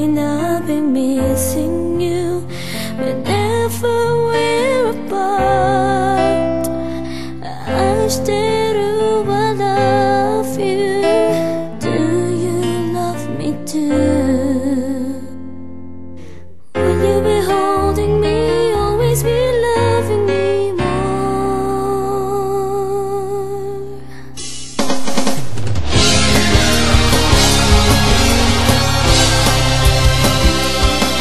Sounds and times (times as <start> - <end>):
Background music: 0.0 - 31.2
House music: 24.4 - 31.2.